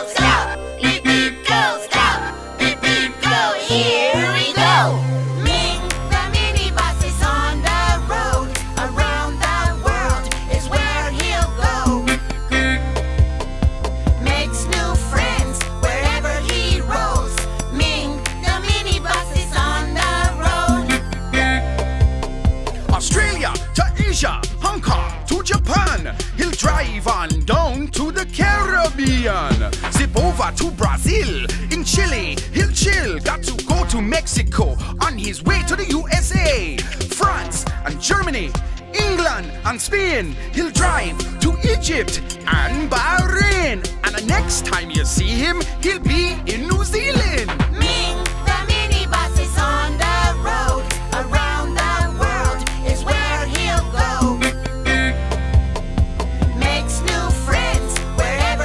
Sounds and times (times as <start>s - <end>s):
Music: 0.0s - 58.6s.